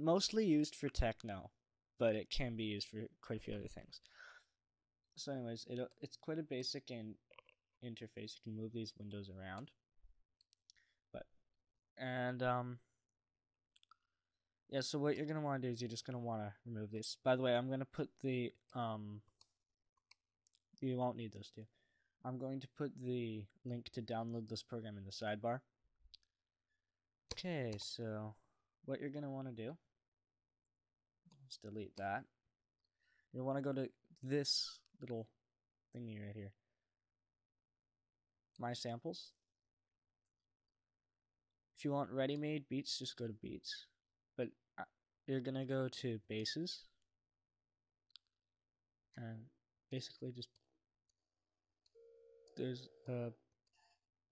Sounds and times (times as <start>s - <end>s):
Speech: 0.0s - 4.0s, 5.2s - 7.2s, 7.8s - 9.8s, 12.0s - 12.8s, 14.7s - 19.2s, 20.8s - 25.7s, 27.3s - 29.8s, 31.4s - 32.3s, 33.4s - 35.4s, 36.0s - 36.6s, 38.6s - 39.4s, 41.8s - 46.9s, 49.2s - 50.6s, 52.6s - 53.4s.